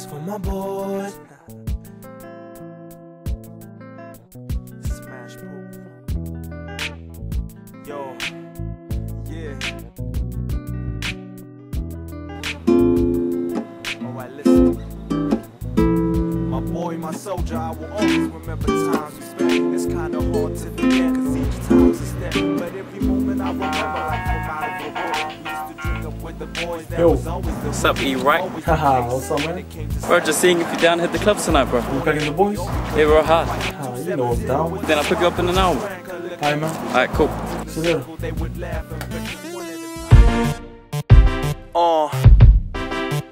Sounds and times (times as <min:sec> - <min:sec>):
Music: 0:00.0 - 0:43.3.